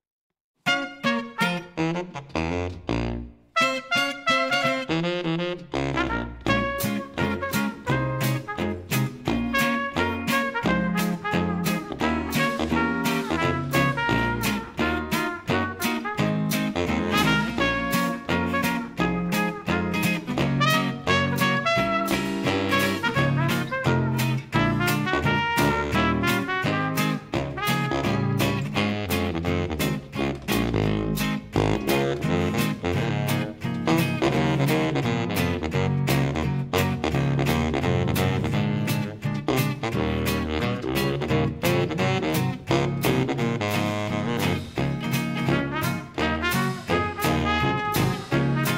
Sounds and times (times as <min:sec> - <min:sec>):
Music: 0:00.6 - 0:48.7.